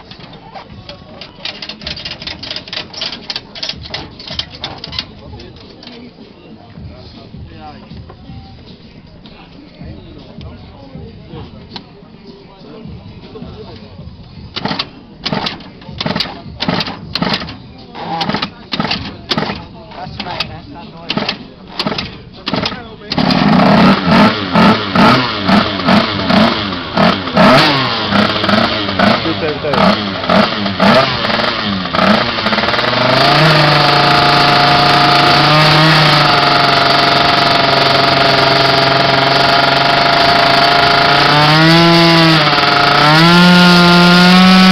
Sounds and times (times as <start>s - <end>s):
Speech: 4.4s - 23.4s, 29.2s - 29.9s.